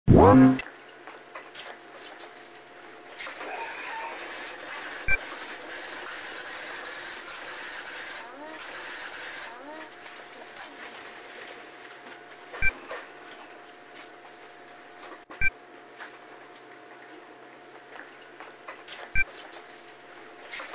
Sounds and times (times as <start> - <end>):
Speech: 0.1 - 0.6, 8.2 - 8.6, 9.4 - 10.9.